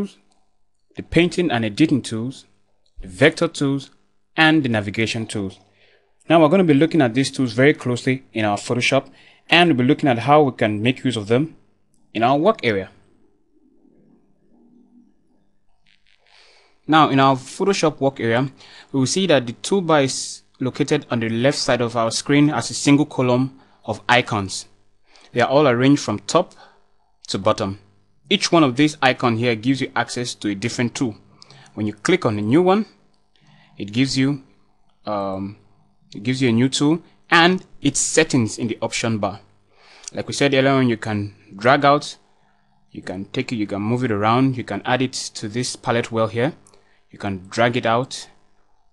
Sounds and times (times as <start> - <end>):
Speech: 0.0 - 0.2, 0.9 - 13.0, 16.9 - 24.7, 25.3 - 33.0, 33.8 - 39.4, 40.1 - 42.2, 42.9 - 48.4.